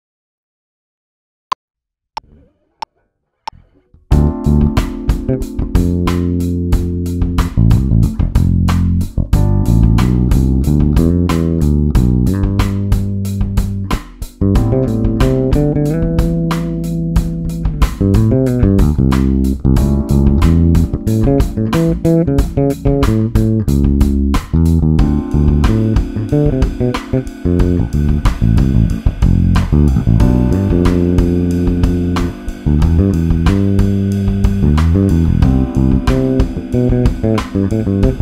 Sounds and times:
Bass guitar: 2.2 - 38.2
Strum: 2.2 - 38.2.

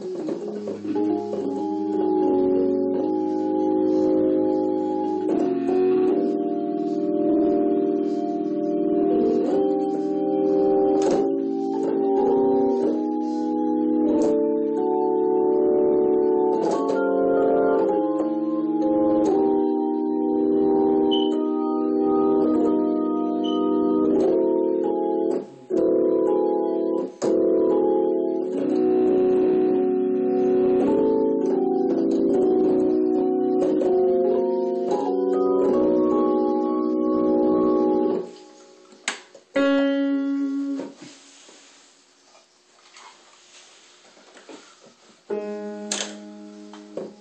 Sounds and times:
Electric piano: 0.0 - 41.4, 44.3 - 47.2
Electronic organ: 0.0 - 47.2.

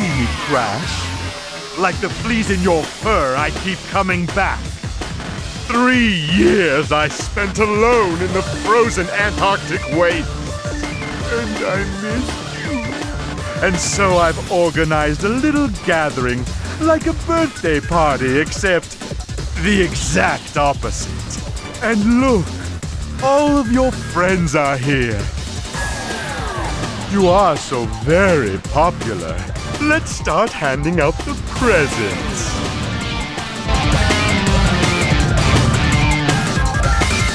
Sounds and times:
Speech: 0.0 - 1.0, 1.8 - 4.6, 5.7 - 10.3, 11.3 - 12.9, 13.6 - 19.0, 19.6 - 22.6, 23.2 - 25.3, 27.1 - 32.6.

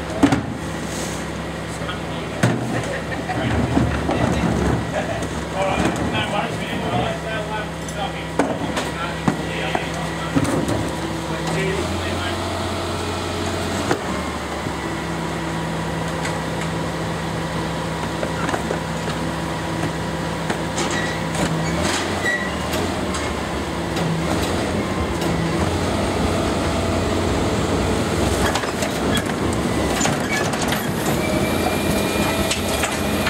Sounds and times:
Truck: 0.0 - 33.3.

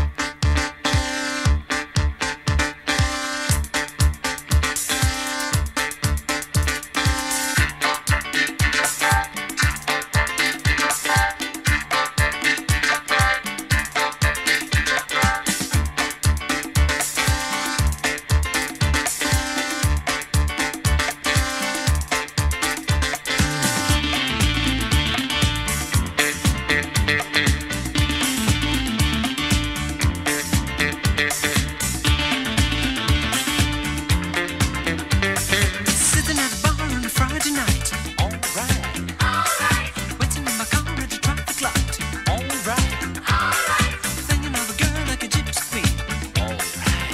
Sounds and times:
Music: 0.0 - 47.1.

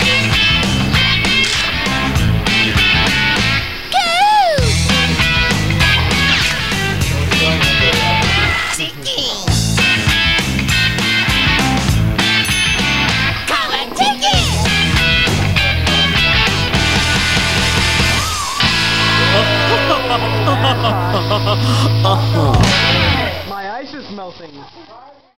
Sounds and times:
Soundtrack music: 4.6 - 8.7, 14.4 - 23.5
Speech: 5.8 - 9.6, 13.5 - 15.8, 19.3 - 25.3.

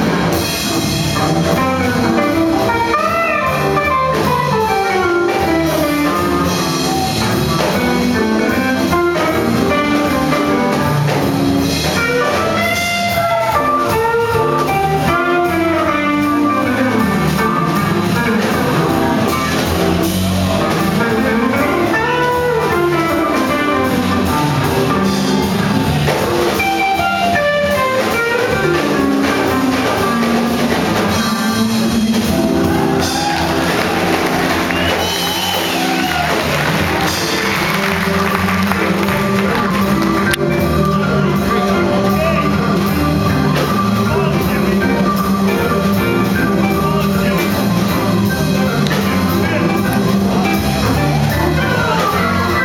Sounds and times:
Hammond organ: 0.0 - 52.6.

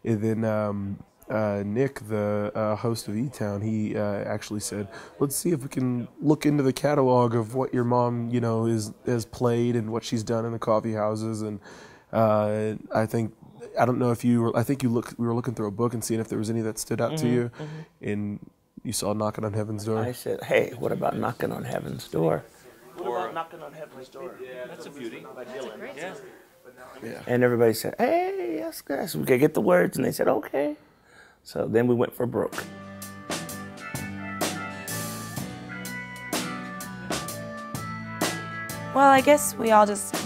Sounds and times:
Speech: 0.0 - 11.6, 12.2 - 30.8, 31.4 - 32.6.

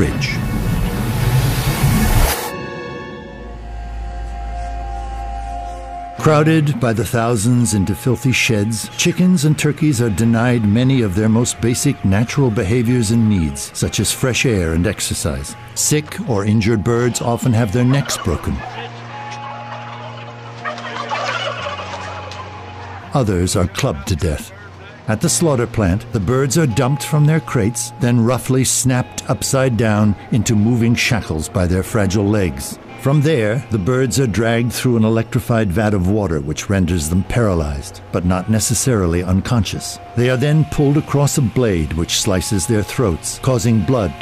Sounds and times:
Speech: 0.0 - 0.4, 6.2 - 18.7, 23.1 - 44.2
Music: 0.0 - 44.2.

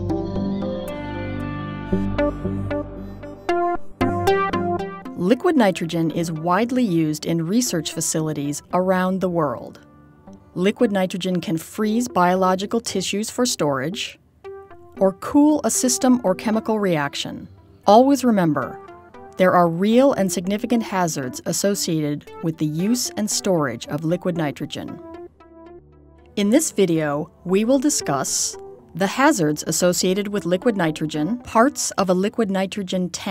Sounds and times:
Music: 0.0 - 33.3
Speech: 5.2 - 9.8, 10.6 - 14.2, 15.0 - 18.8, 19.4 - 25.0, 26.4 - 33.3.

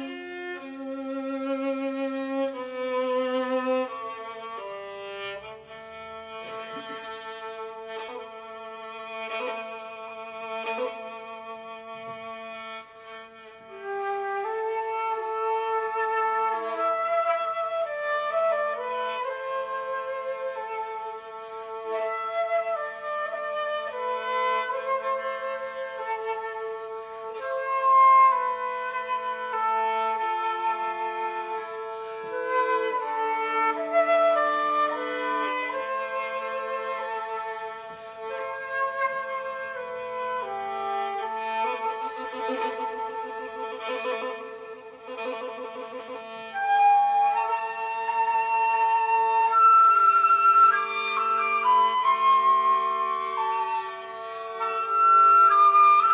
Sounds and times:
Violin, fiddle: 0.0 - 56.1.

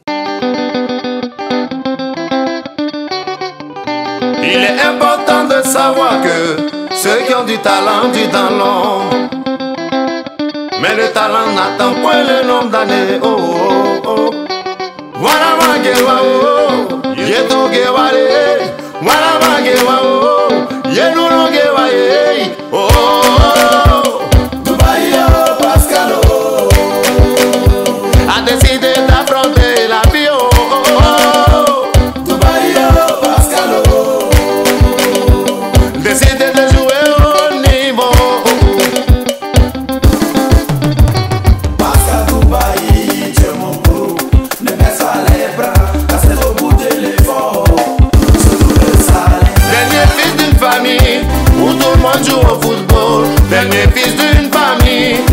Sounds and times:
Music: 0.0 - 55.3.

